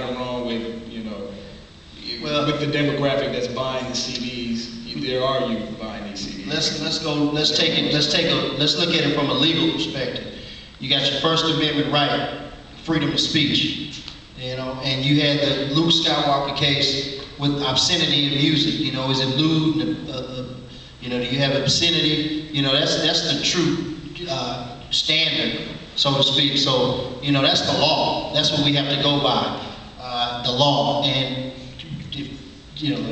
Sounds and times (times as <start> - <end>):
Speech: 0.0 - 33.1.